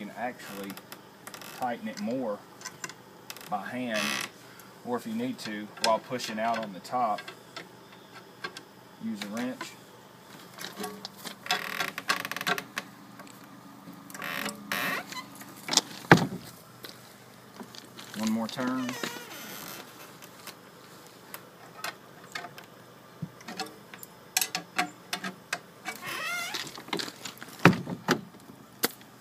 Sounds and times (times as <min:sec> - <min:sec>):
Speech: 0:00.0 - 0:00.8, 0:01.6 - 0:02.4, 0:03.5 - 0:04.1, 0:04.8 - 0:07.2, 0:09.0 - 0:09.8, 0:18.1 - 0:19.0.